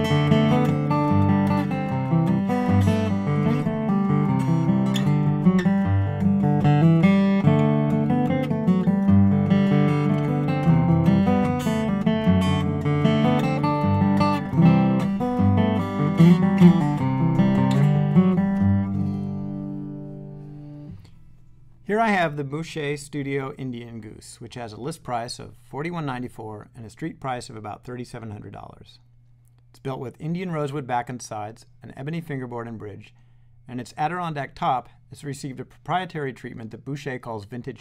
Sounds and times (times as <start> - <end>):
Speech: 21.9 - 29.0, 29.8 - 37.8.